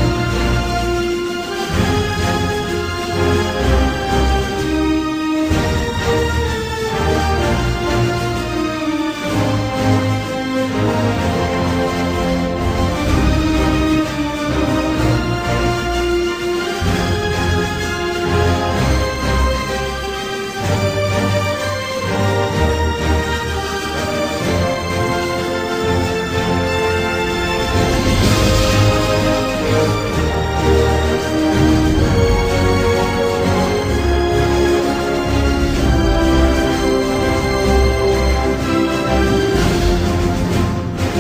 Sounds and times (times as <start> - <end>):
Soundtrack music: 0.0 - 41.2
Theme music: 0.0 - 41.2.